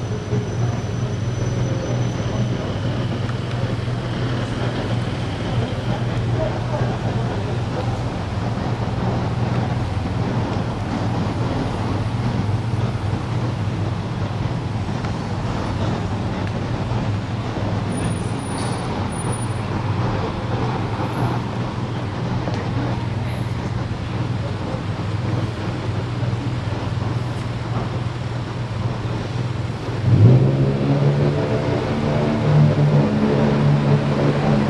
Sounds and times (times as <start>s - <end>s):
Car: 0.0s - 34.7s.